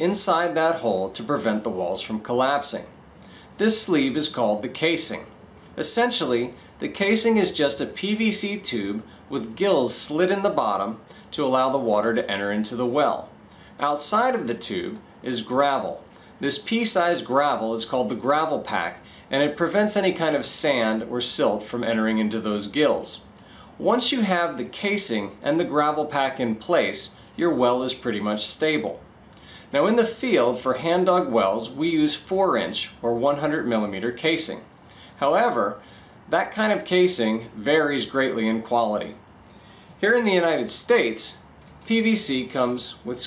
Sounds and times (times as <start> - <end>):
Speech: 0.0 - 3.0, 3.6 - 29.1, 29.7 - 39.2, 40.0 - 43.2.